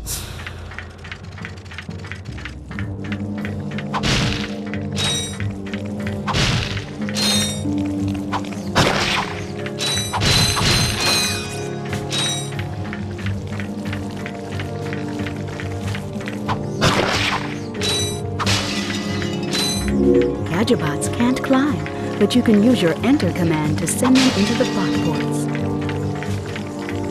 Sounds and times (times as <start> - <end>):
Music: 0.0 - 27.1
Speech: 20.5 - 25.5.